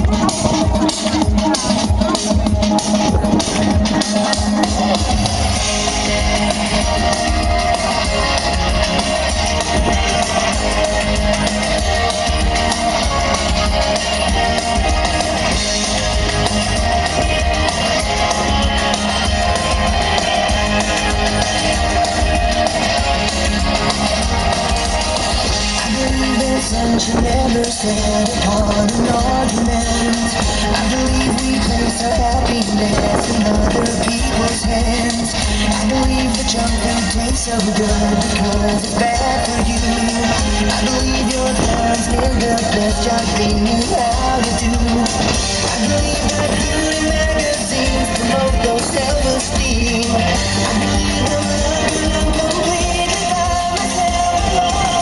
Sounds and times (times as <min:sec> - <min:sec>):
Rock and roll: 0:00.0 - 0:55.0.